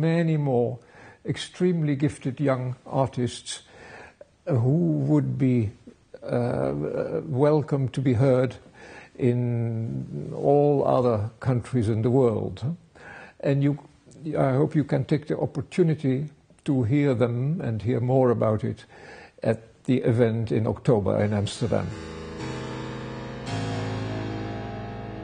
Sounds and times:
Speech: 0.0s - 3.7s, 4.4s - 8.6s, 9.2s - 12.8s, 13.4s - 21.9s.

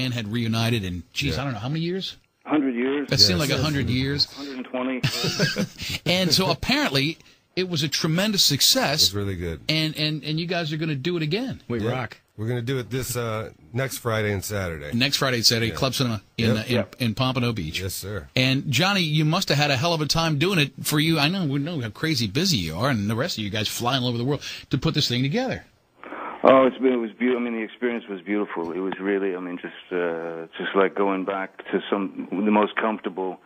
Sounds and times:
Speech: 0.0s - 25.7s, 26.4s - 33.4s.

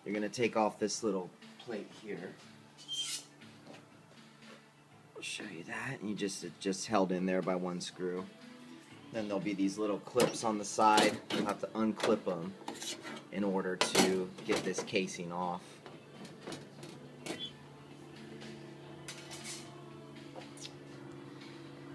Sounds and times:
Speech: 0.0s - 2.4s, 5.2s - 8.3s, 9.2s - 12.5s, 13.3s - 15.6s.

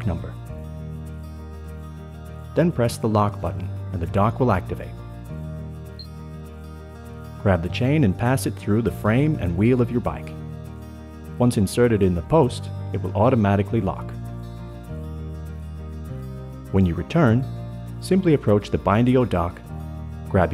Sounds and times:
Speech: 0.0s - 0.4s, 2.6s - 5.0s, 7.4s - 10.4s, 11.4s - 14.2s, 16.7s - 19.6s, 20.3s - 20.5s
Music: 0.0s - 20.5s.

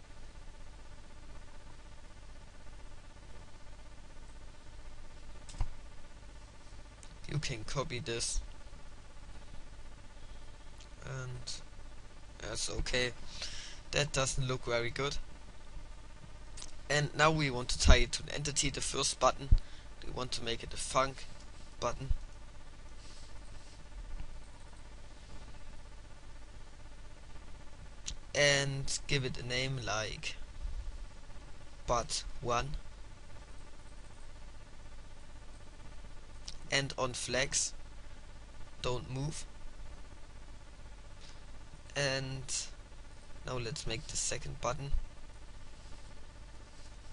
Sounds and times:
Speech: 7.2s - 8.5s, 11.0s - 11.7s, 12.4s - 13.2s, 13.9s - 15.2s, 16.9s - 22.2s, 28.3s - 30.4s, 31.9s - 32.8s, 36.7s - 37.8s, 38.8s - 39.5s, 41.9s - 42.8s, 43.4s - 45.0s.

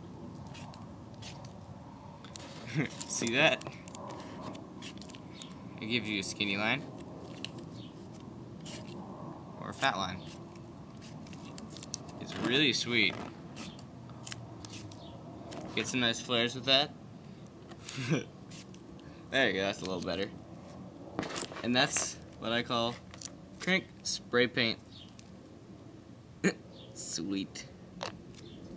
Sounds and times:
Speech: 9.6s - 10.2s, 12.2s - 13.2s, 15.8s - 16.9s, 19.3s - 20.3s, 21.6s - 23.0s, 23.6s - 24.8s, 27.0s - 27.7s.

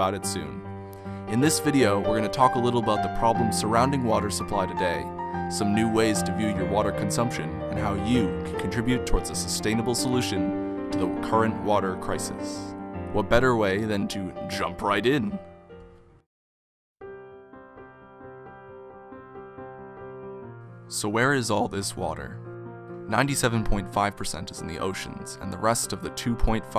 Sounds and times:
Speech: 0.0s - 0.6s, 1.3s - 15.4s, 20.9s - 22.4s, 23.1s - 26.7s
Music: 0.0s - 16.3s, 17.0s - 26.7s.

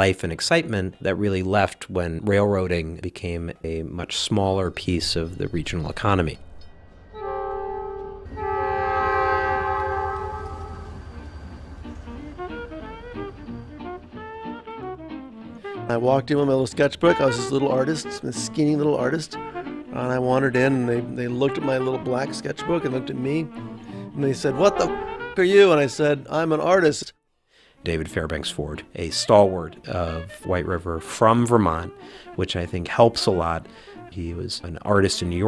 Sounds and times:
Railroad car, train wagon: 5.1s - 14.8s
Train horn: 7.1s - 15.0s, 24.2s - 25.9s.

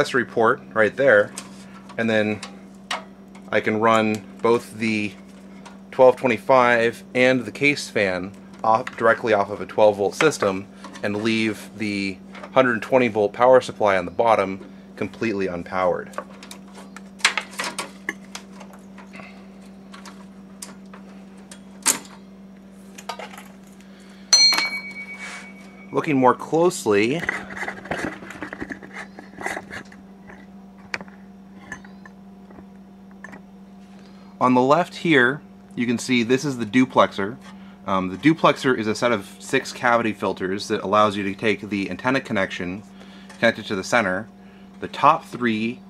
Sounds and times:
Speech: 0.0s - 1.3s, 2.0s - 2.4s, 3.5s - 5.2s, 5.9s - 16.2s, 25.9s - 27.3s, 34.4s - 42.8s, 43.4s - 45.8s.

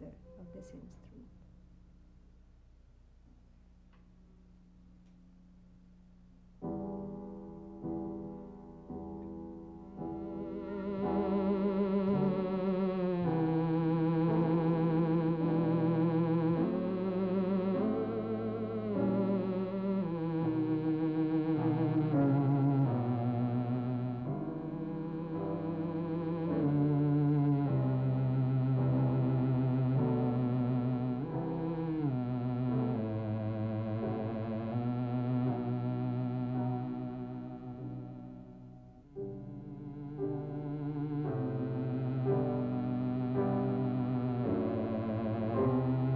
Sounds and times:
Music: 0.0s - 1.4s, 6.5s - 46.1s.

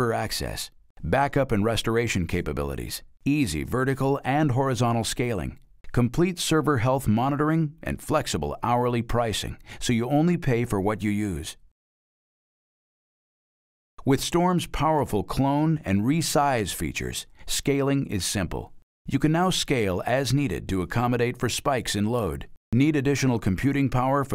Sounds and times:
Speech: 0.0s - 11.6s, 14.0s - 24.3s.

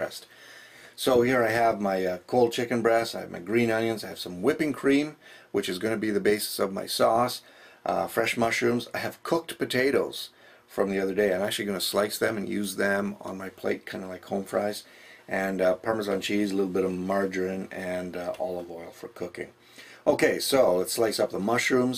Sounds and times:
Speech: 0.0s - 0.3s, 1.0s - 21.9s.

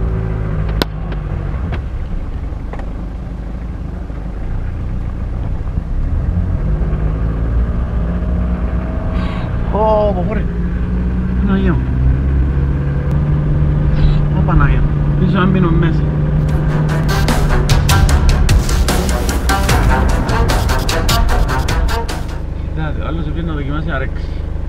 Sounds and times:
Speech: 9.7s - 10.5s, 14.3s - 16.1s, 22.7s - 24.3s
Music: 16.4s - 22.5s.

